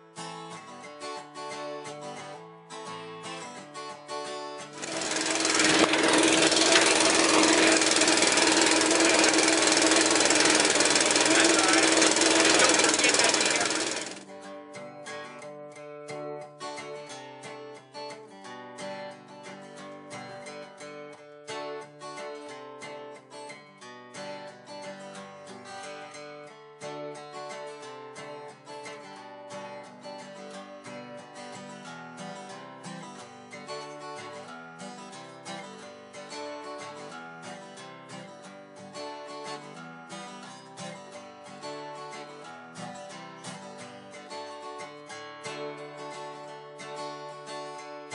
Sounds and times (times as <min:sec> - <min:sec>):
Music: 0:00.0 - 0:06.4, 0:11.2 - 0:48.1
Outside, urban or manmade: 0:00.0 - 0:48.1
Jackhammer: 0:04.6 - 0:14.4
Speech: 0:11.2 - 0:13.9.